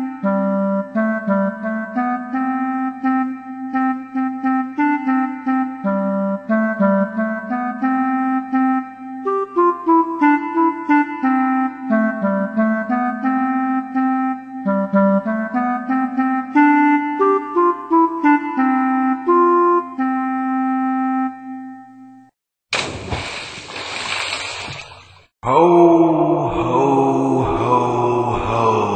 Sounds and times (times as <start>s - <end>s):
Music: 0.0s - 22.4s.